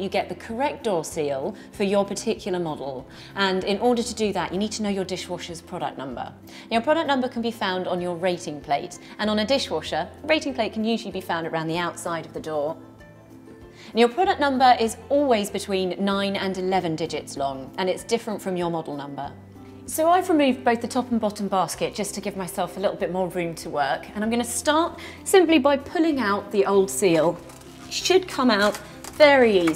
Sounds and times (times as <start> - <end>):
Speech: 0.0 - 12.8, 14.0 - 19.3, 19.9 - 29.7
Music: 0.0 - 29.7.